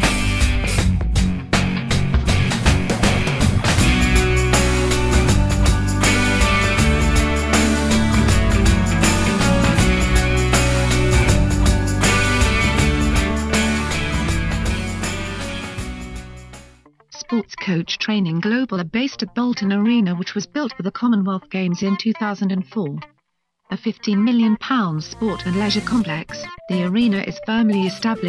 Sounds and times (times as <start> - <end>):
Music: 0.0 - 28.2
Speech synthesizer: 17.2 - 23.1, 23.7 - 28.2.